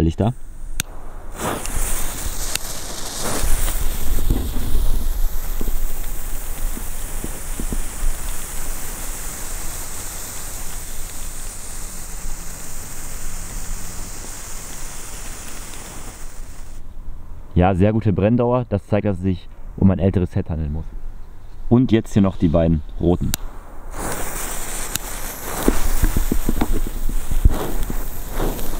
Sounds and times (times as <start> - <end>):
Firecracker: 0.3 - 16.8, 23.3 - 28.7.